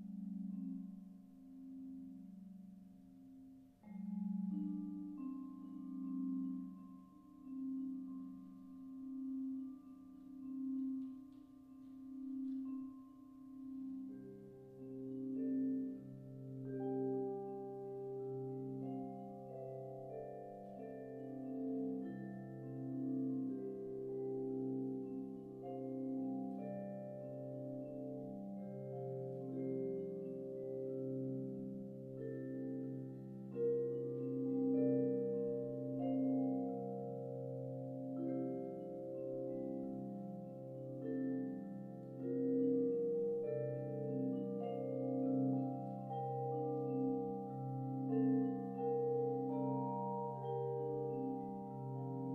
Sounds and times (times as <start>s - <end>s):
Marimba, xylophone: 0.0s - 52.3s
Vibraphone: 0.0s - 52.3s.